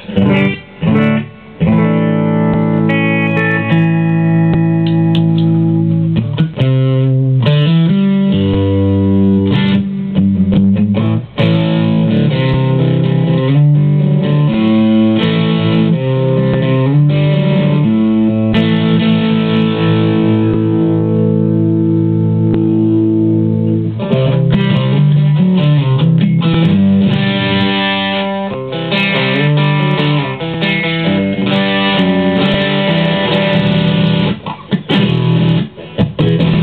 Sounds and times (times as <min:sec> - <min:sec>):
Effects unit: 0:00.0 - 0:36.6
Guitar: 0:00.0 - 0:36.6.